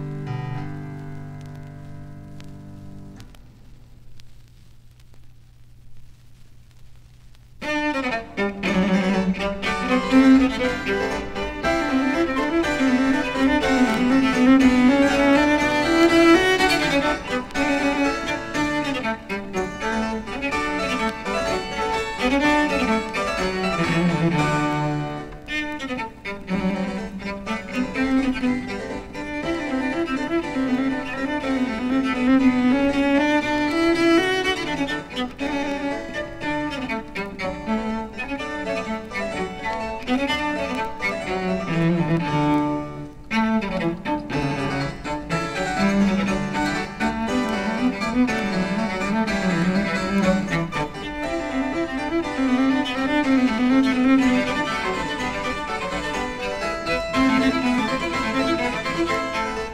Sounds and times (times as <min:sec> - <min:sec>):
Bowed string instrument: 0:00.0 - 0:03.4, 0:07.6 - 0:59.7.